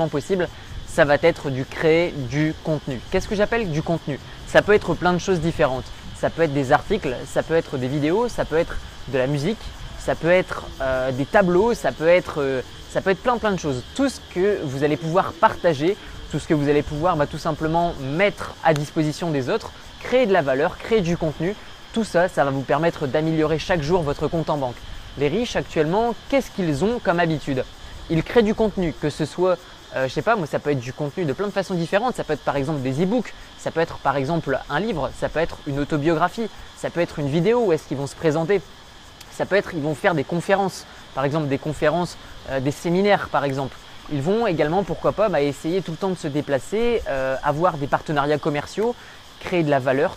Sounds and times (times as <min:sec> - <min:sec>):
Speech: 0:00.0 - 0:50.1.